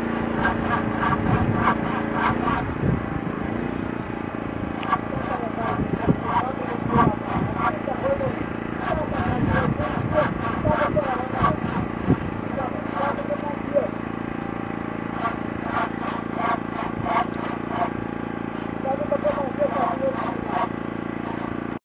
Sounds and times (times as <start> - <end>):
Speech: 5.1 - 11.8, 12.4 - 14.0, 18.8 - 20.7.